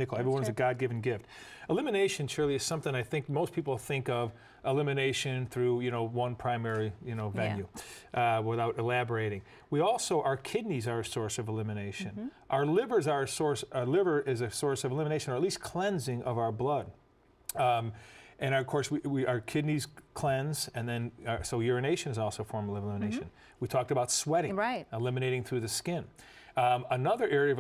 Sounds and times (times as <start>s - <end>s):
Speech: 0.0s - 27.6s.